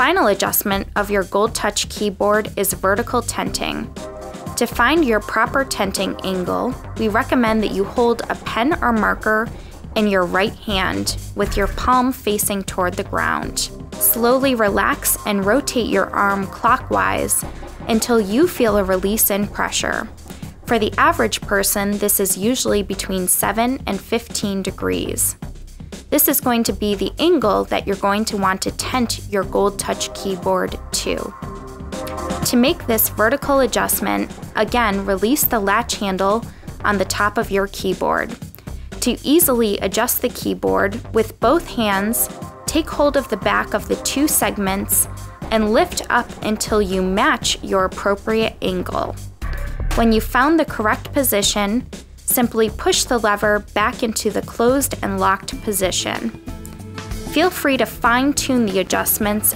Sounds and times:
Speech: 0.0 - 3.9, 4.6 - 20.1, 20.7 - 25.4, 26.1 - 31.4, 32.4 - 38.4, 39.0 - 49.2, 50.0 - 56.3, 57.3 - 59.5
Music: 0.0 - 59.5.

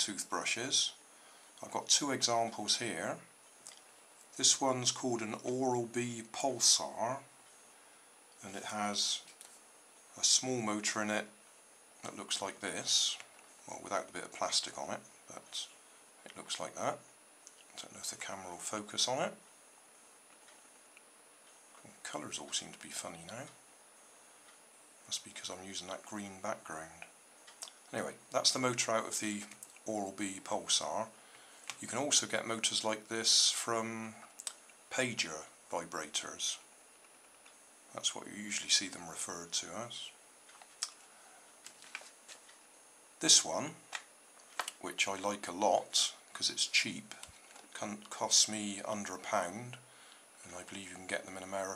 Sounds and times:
Speech: 0.0 - 1.0, 1.6 - 3.3, 4.3 - 7.3, 8.4 - 9.4, 10.1 - 11.4, 12.0 - 17.0, 17.7 - 19.4, 21.8 - 23.6, 25.1 - 27.1, 27.9 - 34.3, 34.9 - 36.7, 37.9 - 40.2, 43.2 - 43.9, 44.7 - 51.7.

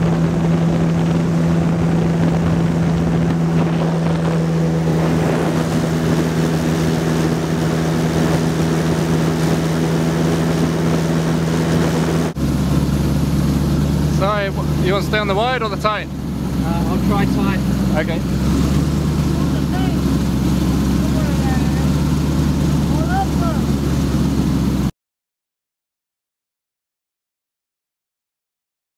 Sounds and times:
Speech: 14.1 - 18.2, 19.3 - 20.0, 21.0 - 21.9, 22.9 - 23.7.

